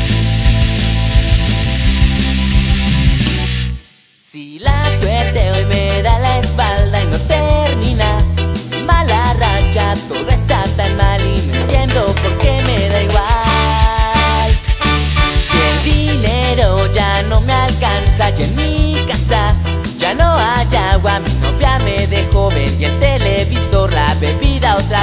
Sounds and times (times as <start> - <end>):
Music: 0.0 - 25.0.